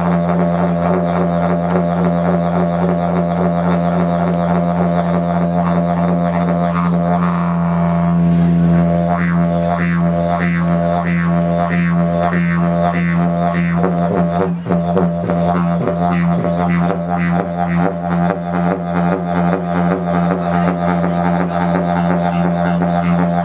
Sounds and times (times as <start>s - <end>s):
Wind instrument, woodwind instrument: 0.0s - 23.4s.